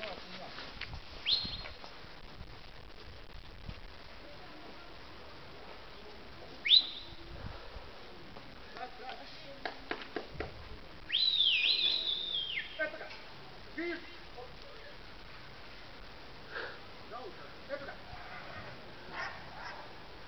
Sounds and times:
Outside, urban or manmade: 0.0s - 20.2s.

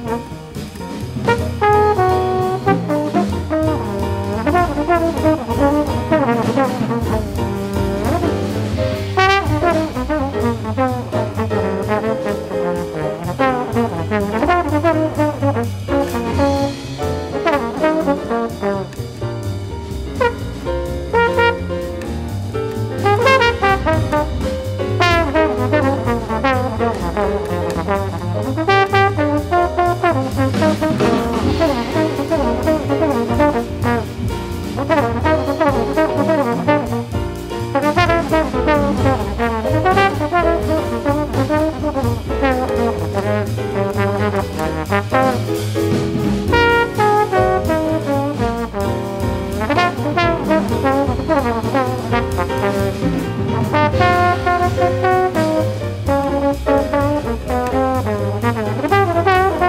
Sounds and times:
Trombone: 0.0s - 59.6s.

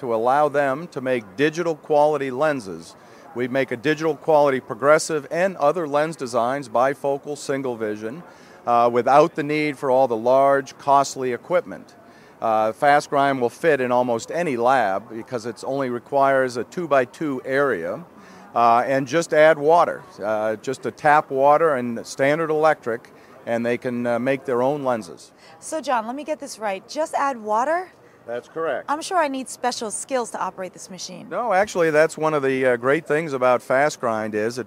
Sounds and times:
Speech: 0.0s - 18.0s.

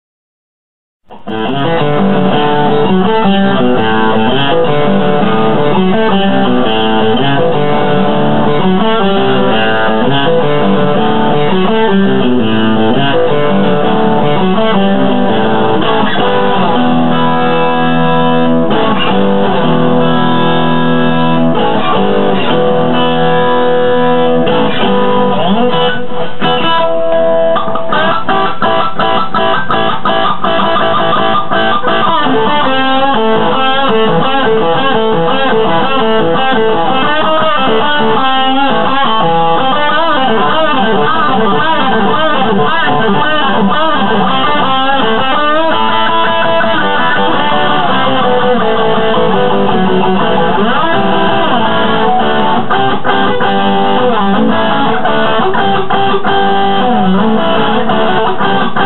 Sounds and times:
Electric guitar: 1.0s - 58.8s.

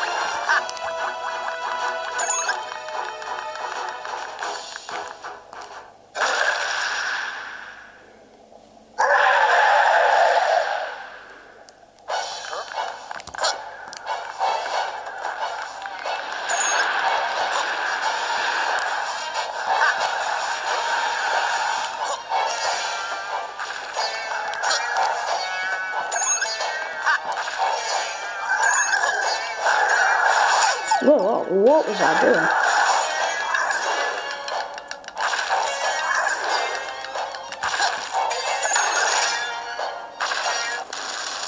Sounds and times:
Music: 0.0s - 6.0s, 12.3s - 30.2s, 32.8s - 40.9s.

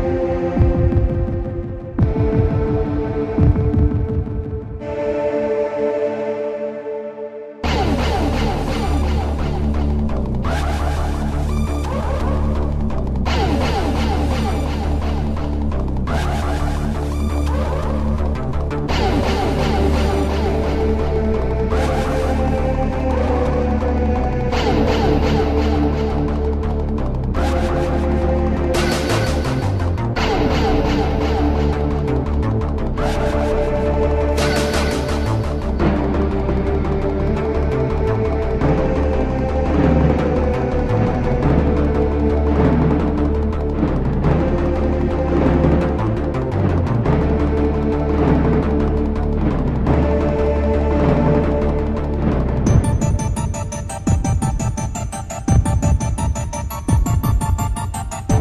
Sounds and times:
Music: 0.0s - 58.4s.

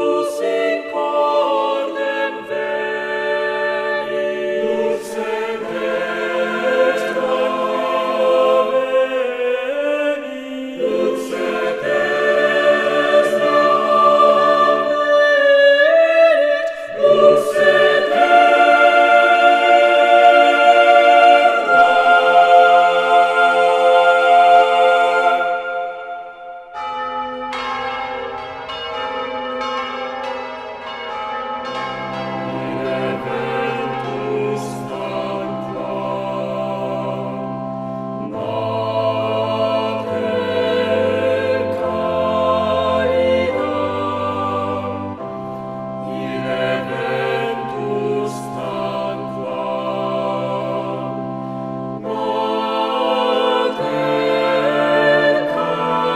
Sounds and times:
Music: 0.0s - 56.1s.

